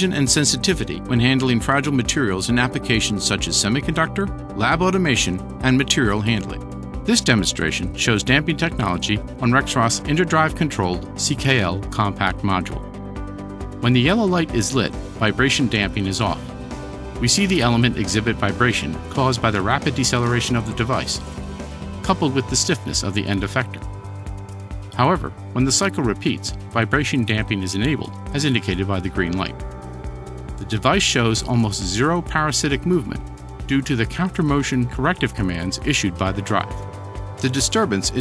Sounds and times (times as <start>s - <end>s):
Speech: 0.0s - 12.8s, 13.8s - 16.5s, 17.2s - 21.2s, 22.0s - 23.8s, 25.0s - 29.6s, 30.6s - 36.8s, 37.4s - 38.2s
Music: 0.0s - 38.2s.